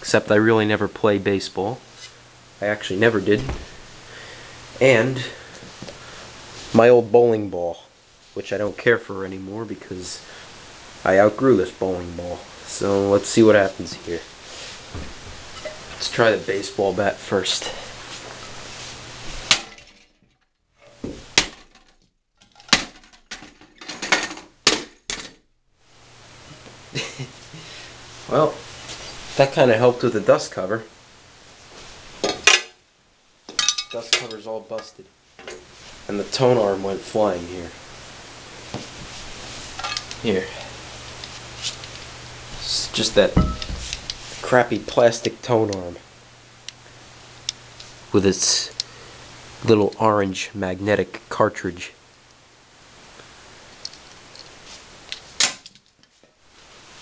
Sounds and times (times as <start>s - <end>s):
Speech: 0.0s - 1.9s, 2.6s - 3.6s, 4.8s - 5.4s, 6.7s - 10.3s, 11.0s - 14.3s, 16.0s - 17.9s, 28.3s - 28.6s, 29.4s - 30.9s, 34.0s - 35.1s, 36.1s - 37.8s, 40.2s - 40.7s, 42.6s - 43.5s, 44.4s - 46.0s, 48.1s - 48.8s, 49.6s - 52.0s.